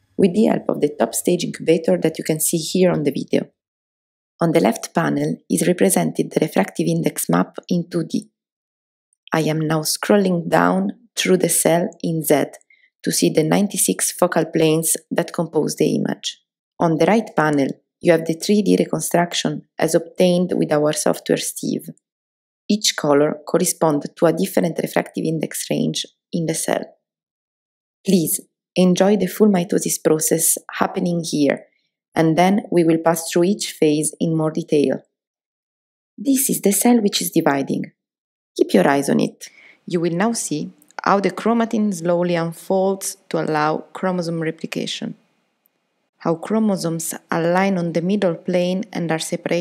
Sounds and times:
Speech: 0.2s - 3.5s, 4.4s - 8.2s, 9.3s - 22.0s, 22.7s - 26.9s, 28.1s - 31.6s, 32.2s - 35.0s, 36.2s - 37.9s, 38.6s - 45.2s, 46.2s - 49.6s.

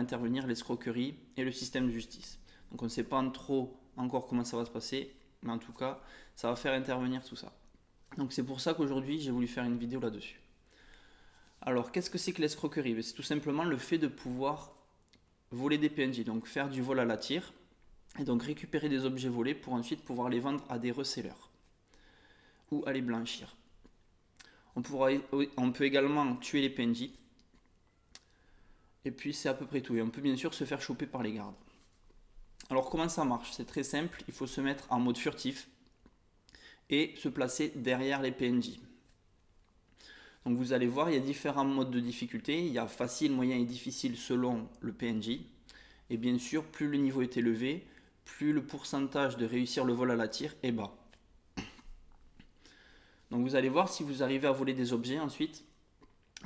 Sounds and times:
Speech: 0.0s - 10.5s, 11.6s - 14.8s, 15.5s - 21.6s, 22.7s - 23.7s, 24.8s - 27.3s, 29.0s - 31.7s, 32.6s - 35.8s, 36.9s - 39.0s, 40.4s - 51.1s, 53.3s - 55.8s.

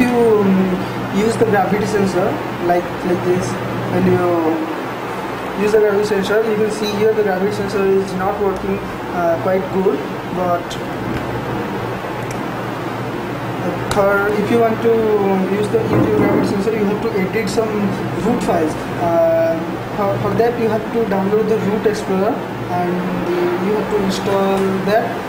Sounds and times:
Speech: 0.0s - 4.8s, 5.6s - 10.8s, 13.6s - 25.2s.

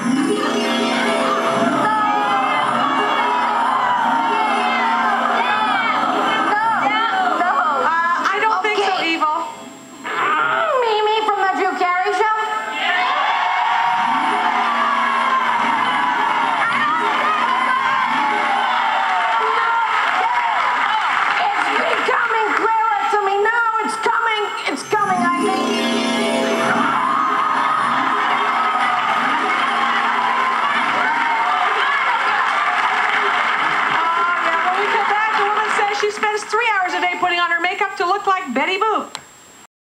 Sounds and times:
Inside, public space: 0.0s - 39.7s
Speech: 21.4s - 25.6s, 34.0s - 39.2s.

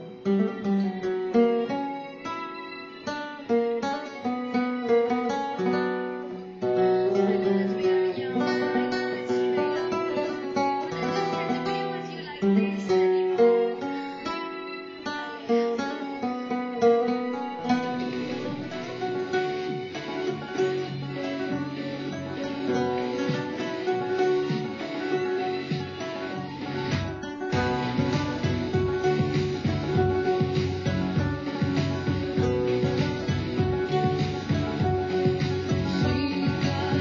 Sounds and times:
Acoustic guitar: 0.0s - 37.0s
Strum: 0.0s - 37.0s.

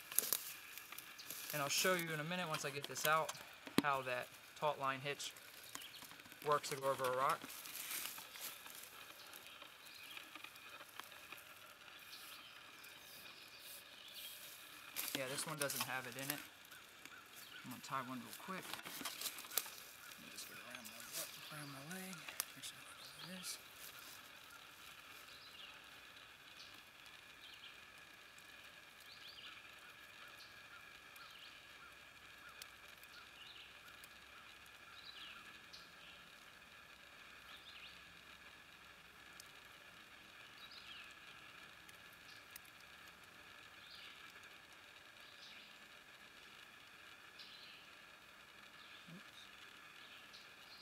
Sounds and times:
Outside, rural or natural: 0.0s - 50.8s
Speech: 1.5s - 5.4s, 6.4s - 7.5s, 15.0s - 16.5s, 17.6s - 18.8s, 20.2s - 23.6s.

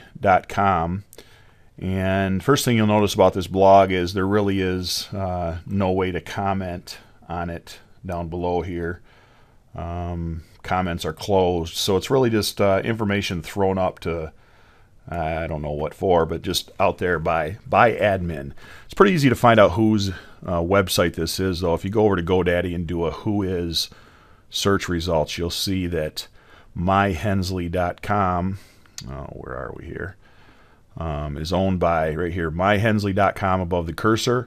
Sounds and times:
Speech: 0.0s - 1.2s, 1.8s - 9.0s, 9.8s - 14.4s, 15.1s - 23.9s, 24.5s - 30.2s, 31.0s - 34.4s.

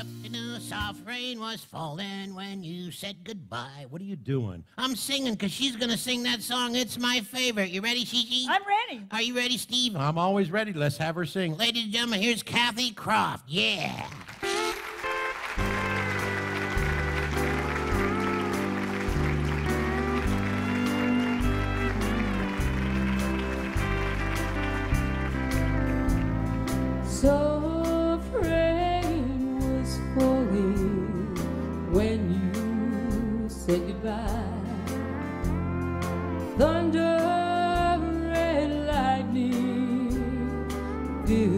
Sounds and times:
Music: 0.0s - 2.6s, 14.3s - 41.5s
Female singing: 27.1s - 34.8s, 36.6s - 41.5s.

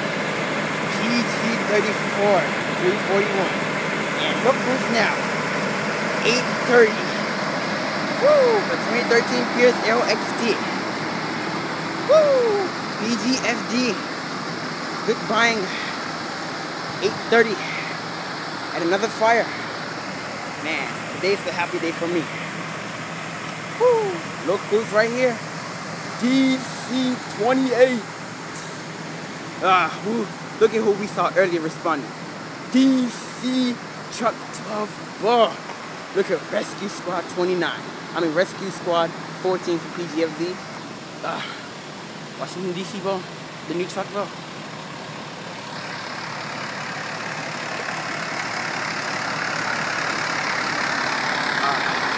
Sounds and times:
Speech: 0.9s - 3.6s, 4.2s - 5.2s, 6.2s - 7.3s, 8.2s - 10.8s, 12.1s - 14.0s, 15.1s - 16.0s, 17.0s - 18.0s, 18.7s - 19.6s, 20.6s - 22.4s, 23.8s - 25.4s, 26.2s - 28.9s, 29.6s - 32.1s, 32.7s - 40.6s, 41.2s - 41.6s, 42.4s - 44.3s, 51.6s - 52.1s.

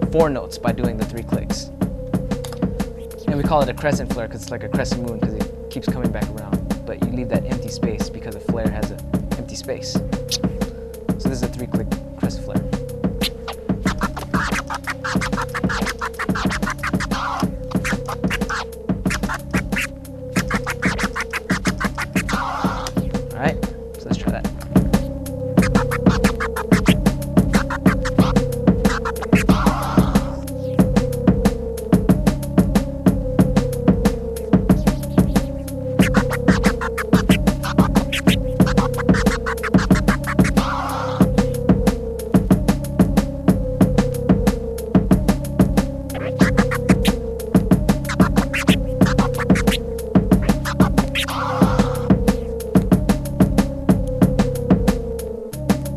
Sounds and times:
Hip hop music: 13.2s - 23.2s, 24.7s - 31.0s, 34.1s - 41.6s, 46.1s - 47.2s, 47.9s - 52.6s
Scratching (performance technique): 13.2s - 23.2s, 24.7s - 31.0s, 34.1s - 41.6s, 46.1s - 52.6s.

